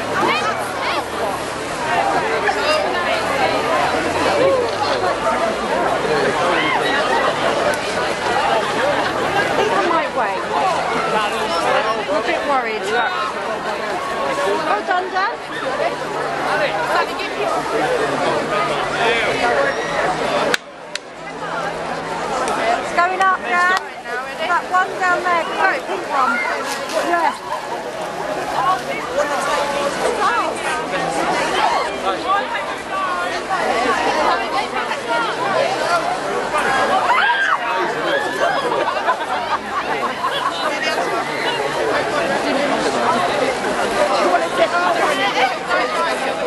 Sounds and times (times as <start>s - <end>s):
Speech: 0.0s - 46.4s.